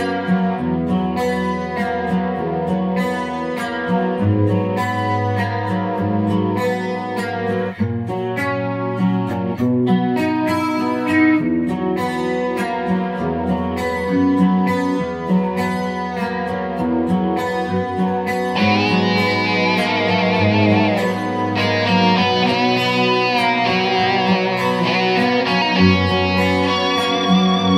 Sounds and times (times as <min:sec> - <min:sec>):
Bass guitar: 0:00.0 - 0:27.7
Electric guitar: 0:00.0 - 0:27.7.